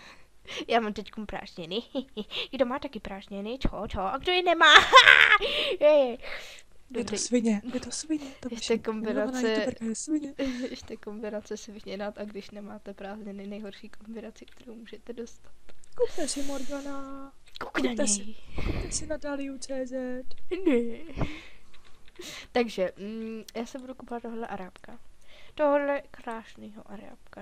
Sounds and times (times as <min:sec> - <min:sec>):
Speech: 0:00.6 - 0:04.9, 0:06.9 - 0:15.4, 0:16.0 - 0:20.2, 0:22.6 - 0:25.0, 0:25.6 - 0:27.4.